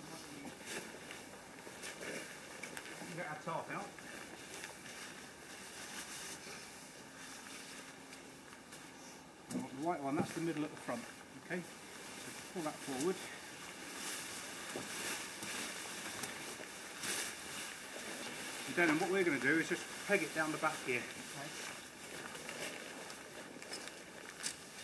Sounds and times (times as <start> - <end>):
Speech: 3.0 - 3.9, 9.5 - 11.7, 12.5 - 13.4, 18.7 - 21.6.